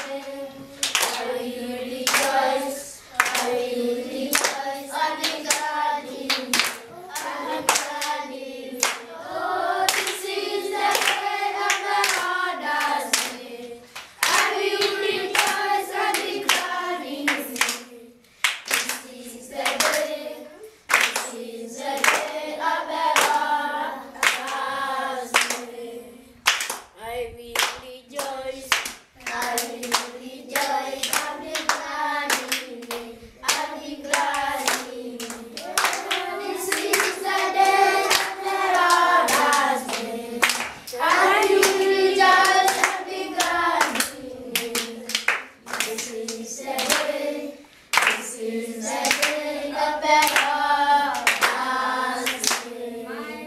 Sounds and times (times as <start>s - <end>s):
Choir: 0.0s - 26.4s, 27.0s - 53.4s
Inside, small room: 0.0s - 53.4s.